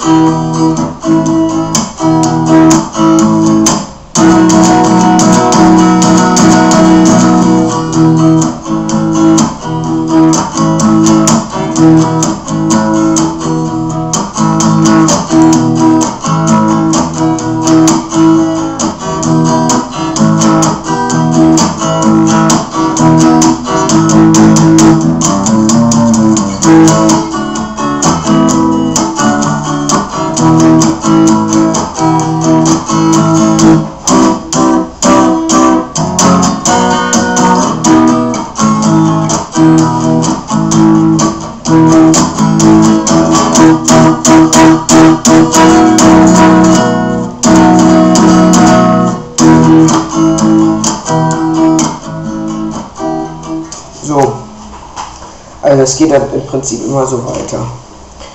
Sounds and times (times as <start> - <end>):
Acoustic guitar: 0.0 - 58.3
Strum: 0.0 - 58.3.